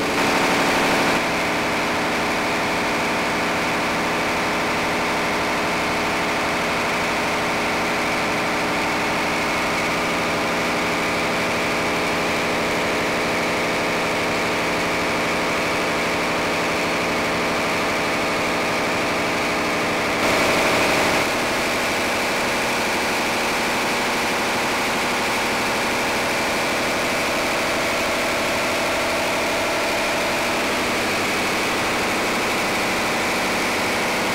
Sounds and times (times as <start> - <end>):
Heavy engine (low frequency): 0.0 - 34.3
Idling: 0.0 - 34.3.